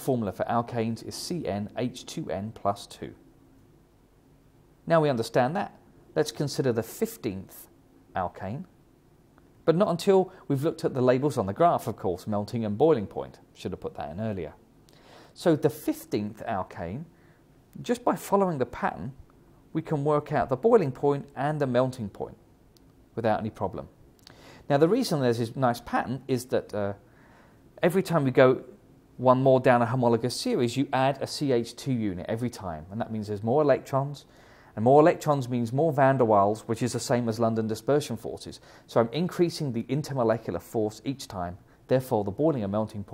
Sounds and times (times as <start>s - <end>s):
Speech: 0.0s - 3.2s, 4.8s - 8.8s, 9.6s - 14.6s, 15.4s - 17.2s, 17.8s - 22.4s, 23.2s - 24.0s, 24.7s - 27.0s, 27.8s - 43.1s.